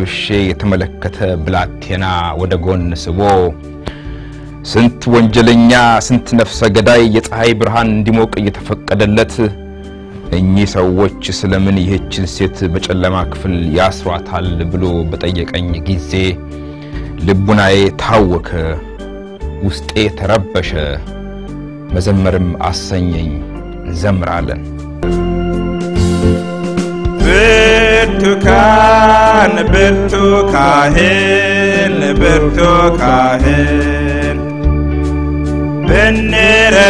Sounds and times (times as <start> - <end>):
Speech: 0.0 - 3.6, 4.7 - 9.6, 10.4 - 16.4, 17.2 - 18.8, 19.6 - 21.0, 22.0 - 24.6
Music: 0.0 - 36.8.